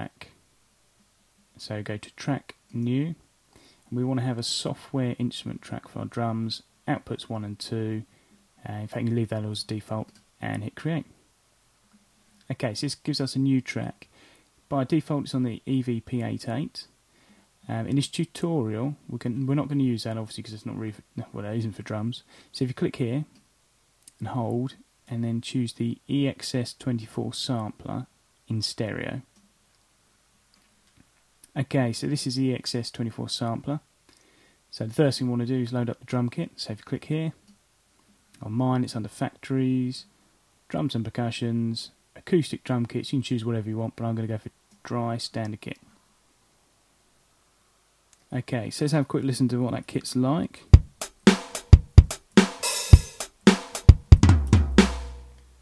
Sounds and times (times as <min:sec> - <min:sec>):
Speech: 0:00.0 - 0:00.4, 0:01.6 - 0:03.2, 0:03.9 - 0:11.2, 0:12.4 - 0:14.1, 0:14.7 - 0:17.0, 0:17.6 - 0:23.4, 0:24.1 - 0:29.3, 0:31.5 - 0:33.9, 0:34.7 - 0:37.4, 0:38.4 - 0:45.9, 0:48.2 - 0:50.8.